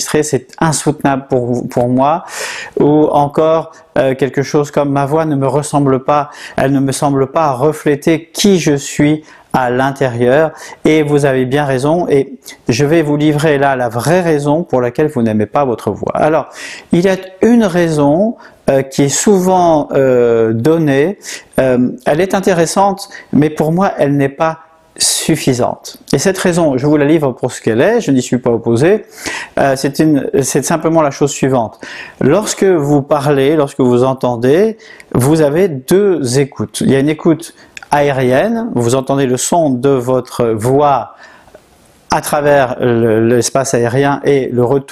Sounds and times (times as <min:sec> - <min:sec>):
Speech: 0:00.0 - 0:41.2, 0:42.1 - 0:44.9.